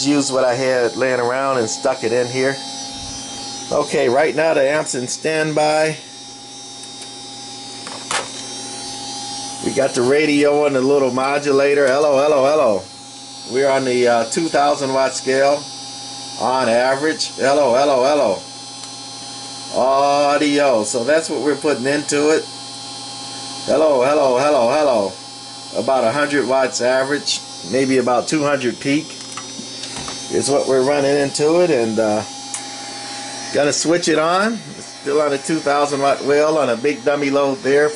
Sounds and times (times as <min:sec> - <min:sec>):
Speech: 0:00.0 - 0:02.6, 0:03.7 - 0:06.0, 0:09.6 - 0:12.9, 0:13.5 - 0:15.7, 0:16.4 - 0:18.5, 0:19.7 - 0:22.5, 0:23.7 - 0:25.2, 0:25.8 - 0:29.2, 0:30.3 - 0:32.3, 0:33.5 - 0:37.9.